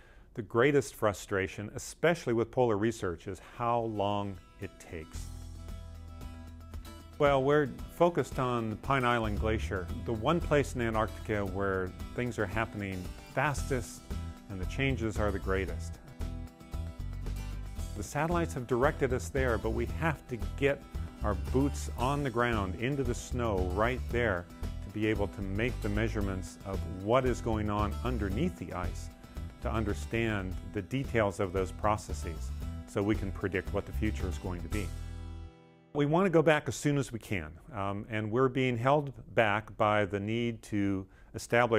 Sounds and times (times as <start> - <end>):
Speech: 0.4 - 5.3, 7.2 - 16.0, 18.0 - 34.9, 36.0 - 41.7
Music: 2.6 - 41.7.